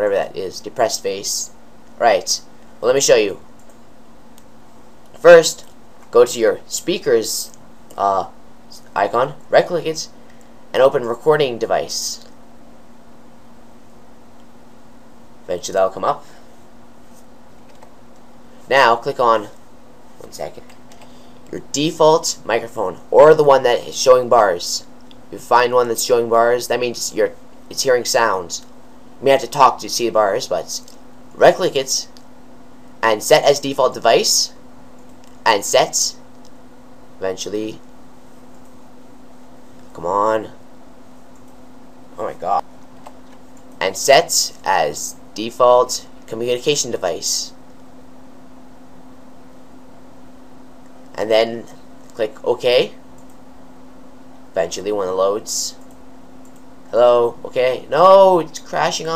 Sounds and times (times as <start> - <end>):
Speech: 0.0 - 3.4, 5.2 - 12.3, 15.5 - 16.4, 18.7 - 19.6, 20.2 - 20.7, 21.5 - 32.2, 33.0 - 34.6, 35.4 - 36.2, 37.2 - 37.8, 39.9 - 40.6, 42.2 - 42.7, 43.8 - 47.6, 51.1 - 53.0, 54.6 - 55.8, 56.9 - 59.1.